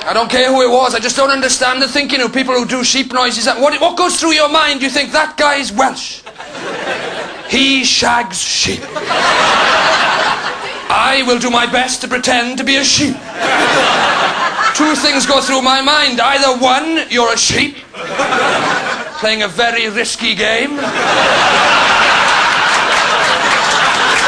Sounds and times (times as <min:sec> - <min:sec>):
Speech: 0:00.0 - 0:06.3, 0:07.5 - 0:09.0, 0:10.9 - 0:13.2, 0:14.7 - 0:17.8, 0:19.2 - 0:20.9.